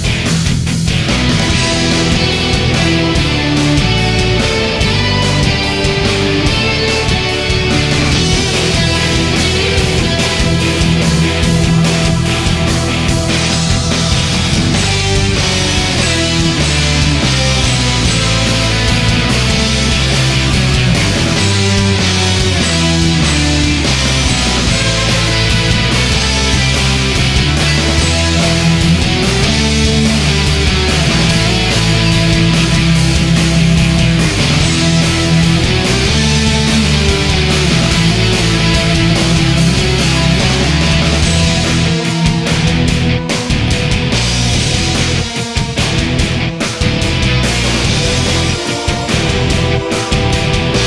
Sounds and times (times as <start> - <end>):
Blues: 0.0 - 50.8
Theme music: 0.0 - 50.8.